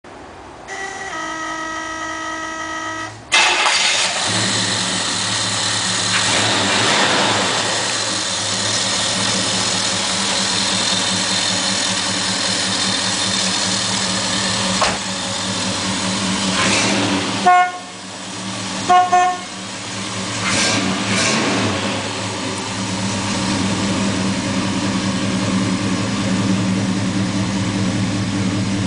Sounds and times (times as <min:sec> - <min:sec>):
Car: 0:00.0 - 0:28.8
Engine: 0:00.1 - 0:28.8.